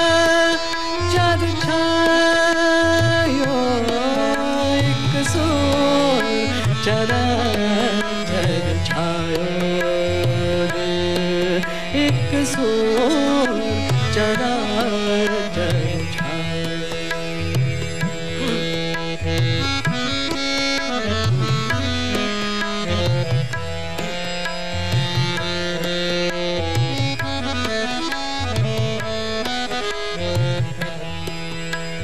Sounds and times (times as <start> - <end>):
Carnatic music: 0.0 - 32.0
Tabla: 0.0 - 32.0.